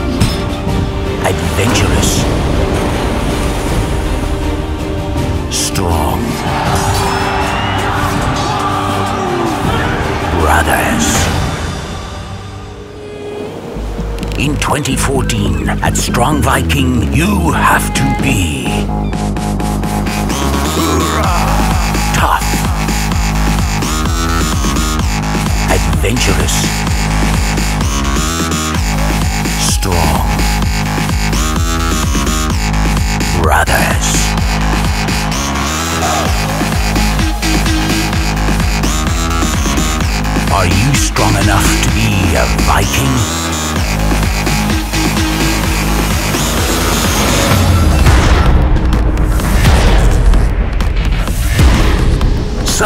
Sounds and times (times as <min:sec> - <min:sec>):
Music: 0:00.0 - 0:52.8
Speech: 0:01.2 - 0:02.2, 0:05.5 - 0:06.4, 0:10.4 - 0:11.2, 0:14.4 - 0:18.9, 0:22.1 - 0:22.6, 0:25.7 - 0:26.7, 0:29.6 - 0:30.4, 0:33.3 - 0:34.3, 0:40.5 - 0:43.3.